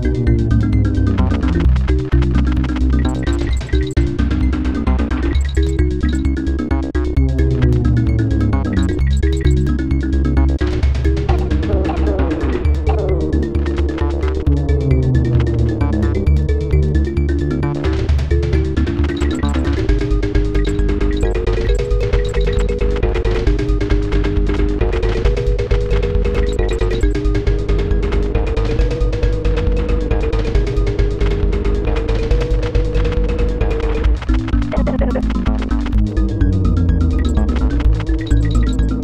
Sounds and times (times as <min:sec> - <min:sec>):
Music: 0:00.0 - 0:39.0
Sound effect: 0:00.0 - 0:39.0.